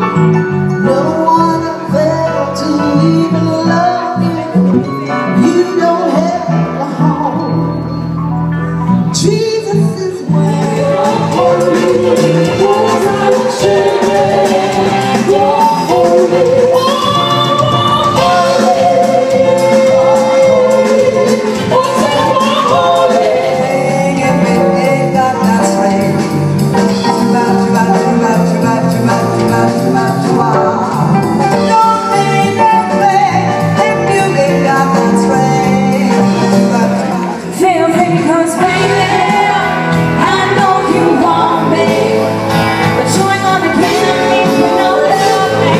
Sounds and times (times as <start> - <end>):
Blues: 0.0 - 45.7.